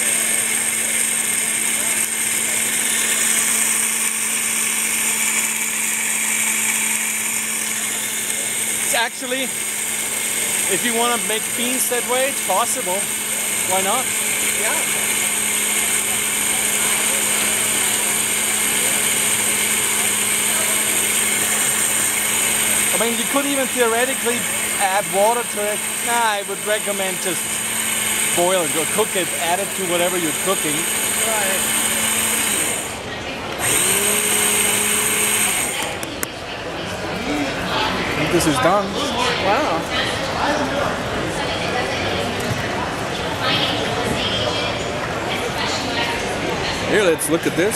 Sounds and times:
Blender: 0.0s - 36.3s.

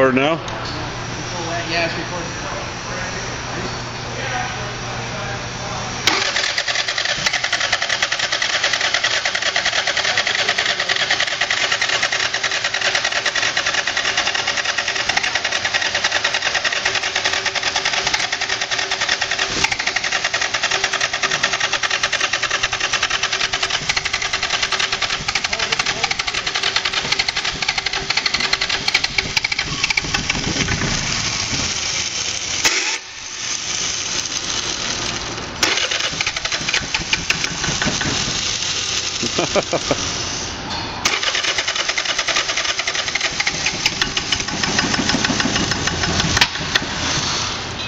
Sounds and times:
Engine: 0.0s - 47.8s
Rattle: 6.1s - 40.4s, 41.0s - 47.7s.

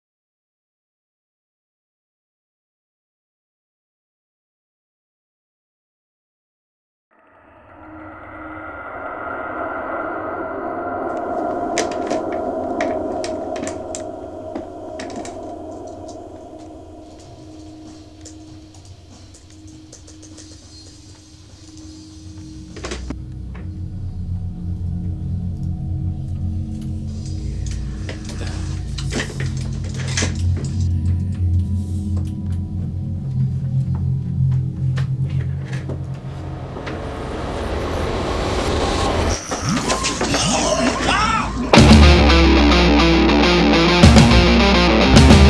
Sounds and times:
Music: 11.0s - 45.5s.

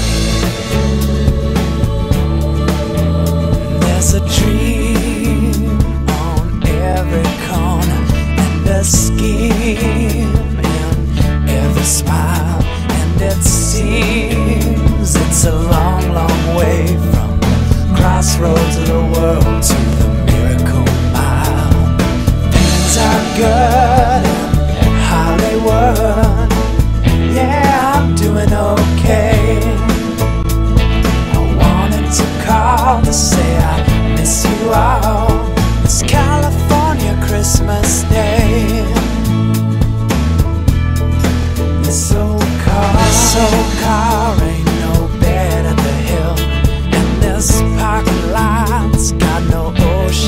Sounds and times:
Christmas music: 0.0s - 50.2s.

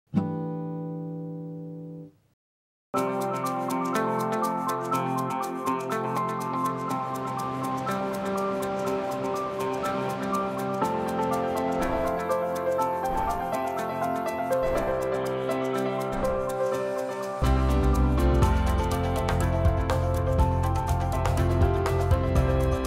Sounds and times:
Music: 0.1s - 2.3s, 3.0s - 22.8s
Outside, rural or natural: 3.3s - 22.8s.

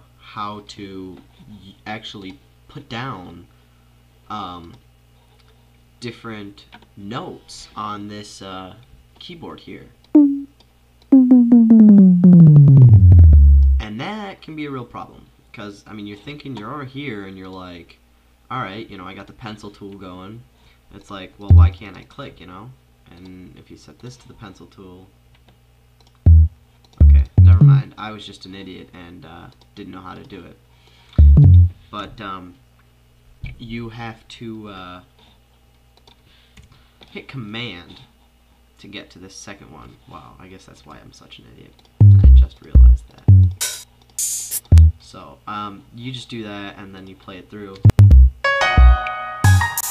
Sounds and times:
Music: 10.2s - 10.5s, 11.2s - 13.9s, 21.5s - 21.8s, 26.3s - 27.9s, 31.2s - 31.8s, 42.0s - 45.0s, 47.9s - 49.9s.

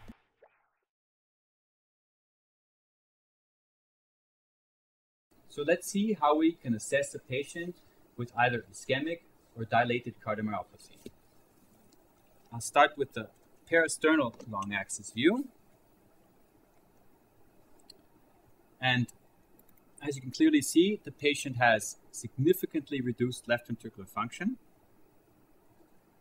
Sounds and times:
Speech: 5.6s - 11.1s, 12.5s - 15.5s, 18.8s - 19.1s, 20.0s - 24.6s.

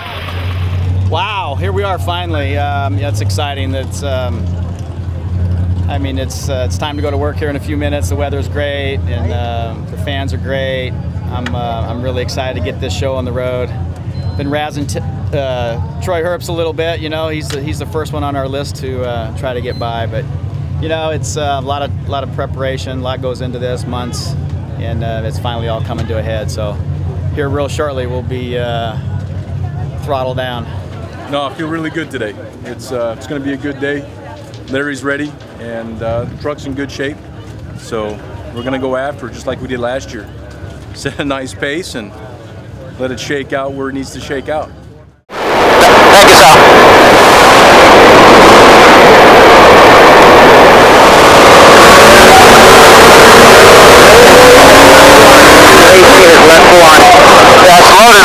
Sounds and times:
Speech: 1.1s - 4.5s, 5.9s - 40.4s, 41.0s - 45.1s, 54.1s - 58.2s.

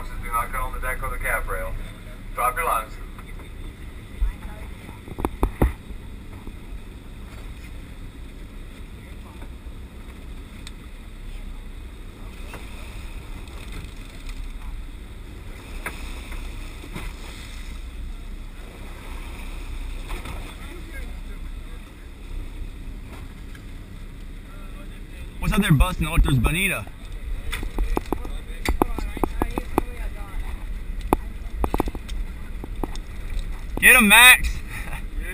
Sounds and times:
Boat, Water vehicle: 0.0s - 35.3s.

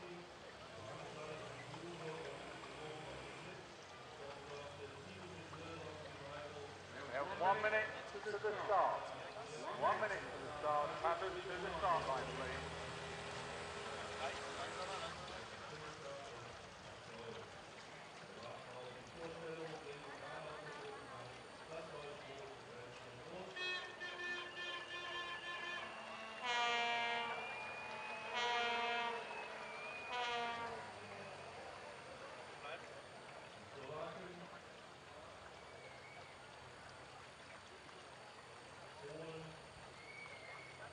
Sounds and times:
Speech: 0.0s - 12.6s, 14.0s - 26.0s, 30.6s - 34.7s, 38.9s - 39.6s
Rowboat, canoe, kayak: 0.0s - 40.9s.

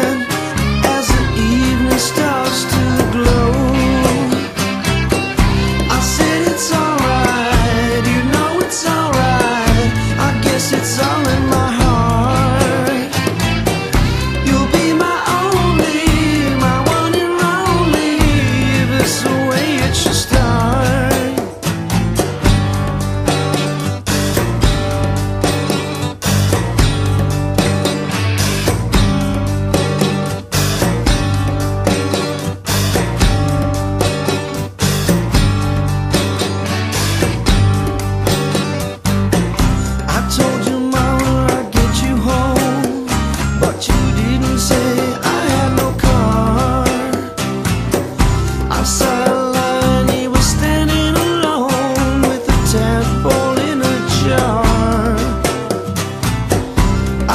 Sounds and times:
Music: 0.0s - 57.3s.

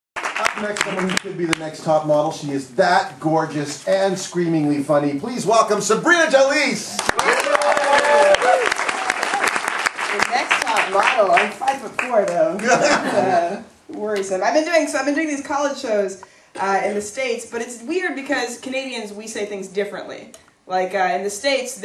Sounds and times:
Shout: 7.2s - 9.5s.

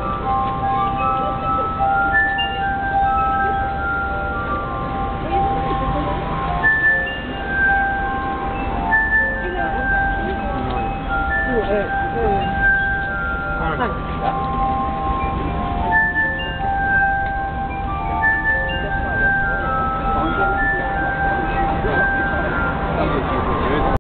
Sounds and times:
Music: 0.0s - 24.0s
Speech: 18.3s - 24.0s.

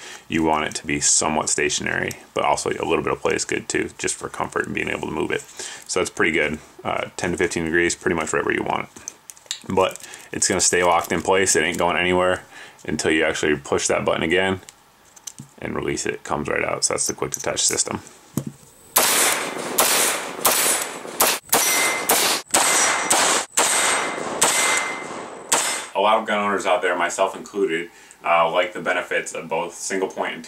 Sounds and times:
Speech: 0.3s - 9.0s, 9.6s - 14.7s, 15.6s - 18.1s, 26.0s - 30.4s
Outside, rural or natural: 18.4s - 26.0s.

